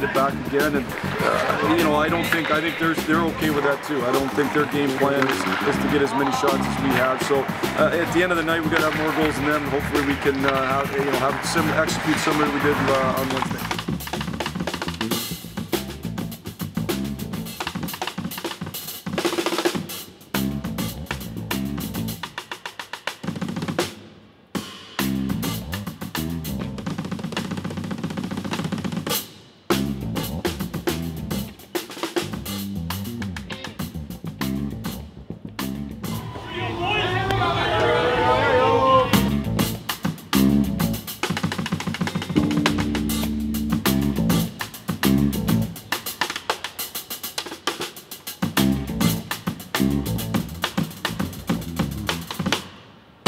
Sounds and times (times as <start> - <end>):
Inside, large room or hall: 0.0 - 15.5, 34.8 - 43.0
Music: 0.0 - 53.2.